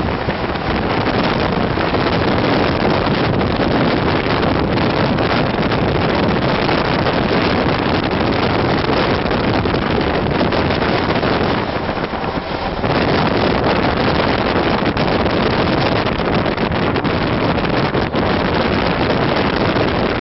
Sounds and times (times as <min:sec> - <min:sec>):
Vehicle: 0:00.0 - 0:20.2.